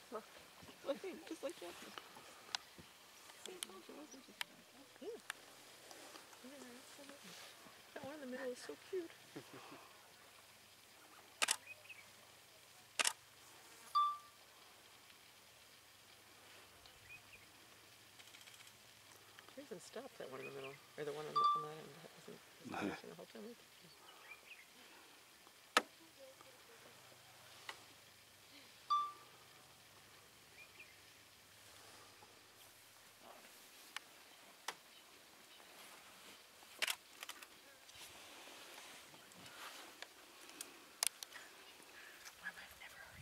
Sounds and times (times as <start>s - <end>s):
Outside, rural or natural: 0.0s - 43.2s.